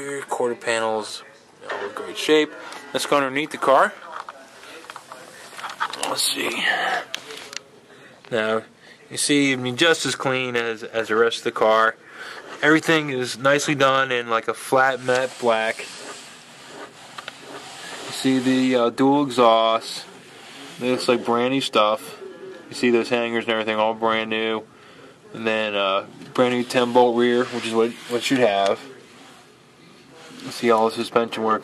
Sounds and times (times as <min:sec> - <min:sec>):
Speech: 0:00.0 - 0:12.0, 0:12.6 - 0:16.0, 0:18.0 - 0:20.2, 0:20.8 - 0:29.2, 0:30.0 - 0:31.6.